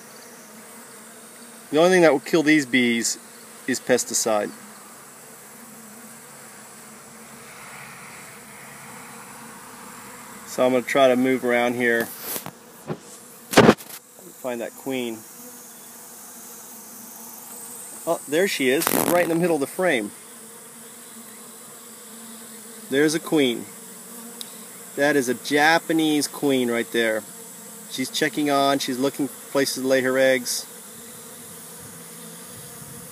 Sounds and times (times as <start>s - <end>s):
Bee, wasp, etc.: 0.0s - 33.1s
Speech: 1.7s - 4.6s, 10.5s - 12.1s, 14.2s - 15.2s, 18.0s - 20.2s, 22.9s - 23.7s, 25.0s - 27.2s, 27.9s - 30.7s.